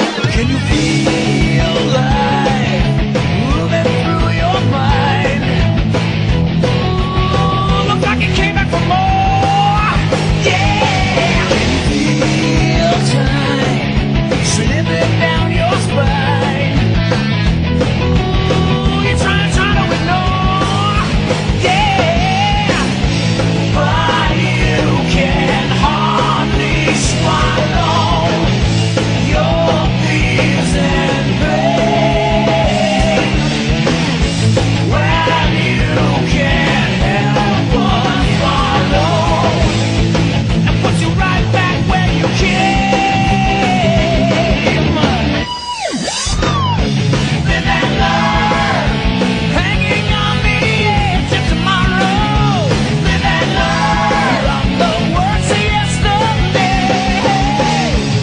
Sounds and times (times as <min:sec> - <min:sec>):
Music: 0:00.0 - 0:58.2.